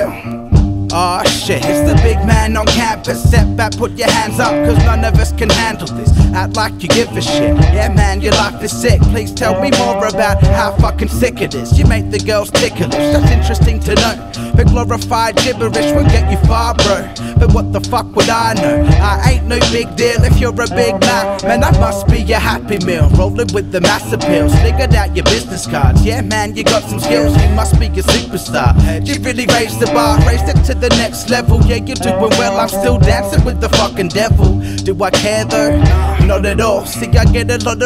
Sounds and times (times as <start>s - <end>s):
Music: 0.0s - 37.8s.